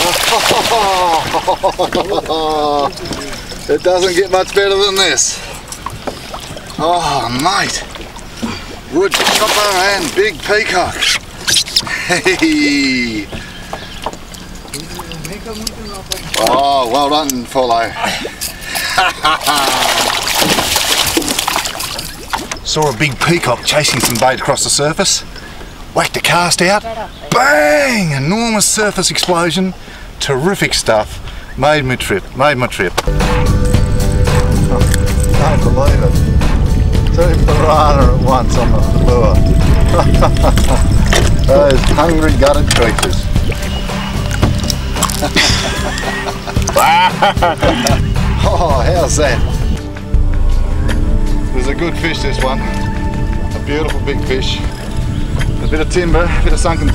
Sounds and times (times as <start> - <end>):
Outside, rural or natural: 0.0 - 56.9
Music: 33.0 - 56.9.